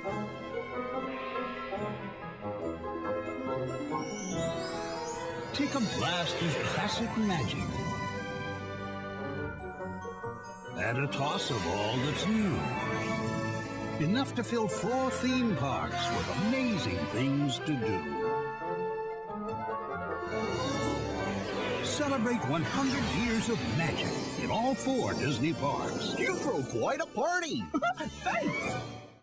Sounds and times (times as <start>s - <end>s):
Music: 0.0s - 29.2s
Speech: 5.6s - 7.8s, 10.8s - 12.7s, 14.0s - 18.1s, 21.8s - 27.7s.